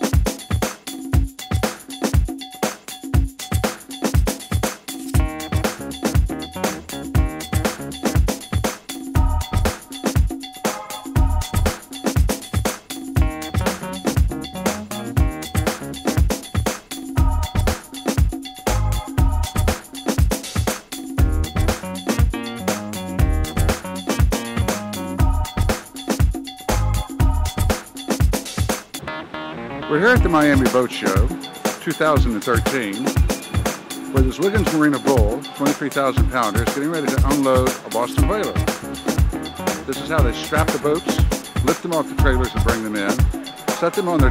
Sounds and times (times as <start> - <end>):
Music: 0.0 - 44.3
Speech: 29.9 - 33.2, 34.1 - 38.7, 39.8 - 44.3.